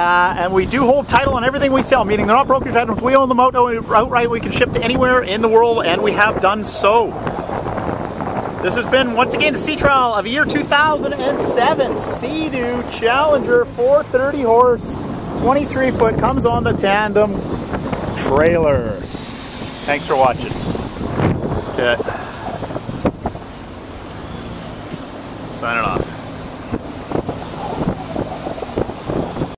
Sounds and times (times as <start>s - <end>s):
Speech: 0.0s - 7.2s, 8.6s - 17.4s, 18.2s - 19.1s, 19.9s - 20.6s, 25.5s - 26.2s
Wind noise (microphone): 0.0s - 23.5s, 25.8s - 29.5s
Boat, Water vehicle: 0.0s - 29.5s
Outside, rural or natural: 0.0s - 29.5s.